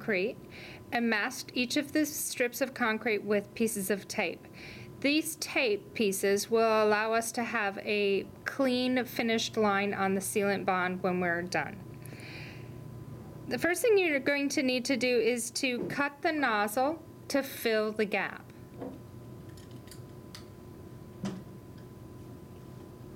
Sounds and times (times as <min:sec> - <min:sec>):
Speech: 0:00.0 - 0:00.4, 0:01.0 - 0:04.4, 0:05.0 - 0:11.8, 0:13.5 - 0:18.5.